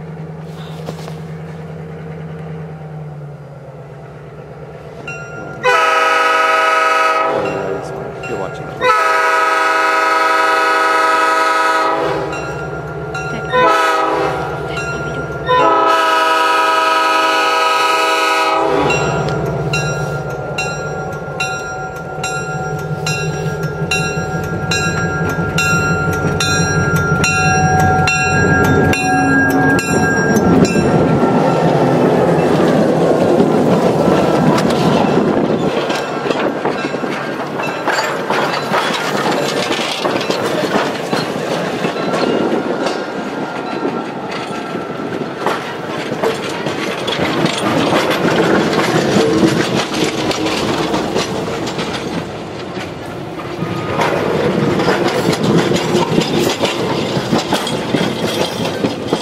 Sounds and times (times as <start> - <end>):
Speech: 7.4 - 8.8.